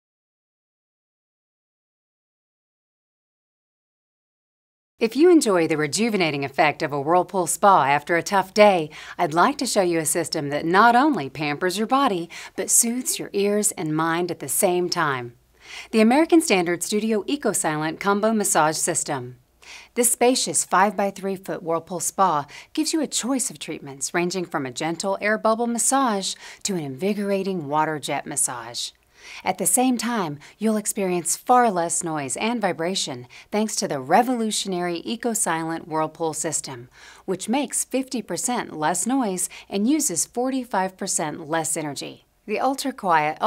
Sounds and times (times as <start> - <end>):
Speech: 5.0 - 19.4, 20.0 - 43.4.